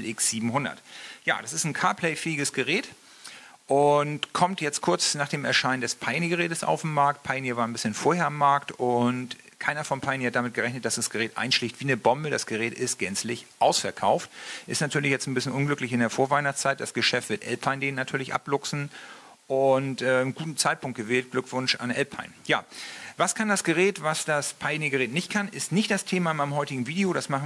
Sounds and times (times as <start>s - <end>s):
Speech: 0.0s - 3.0s, 3.7s - 18.9s, 19.5s - 27.4s.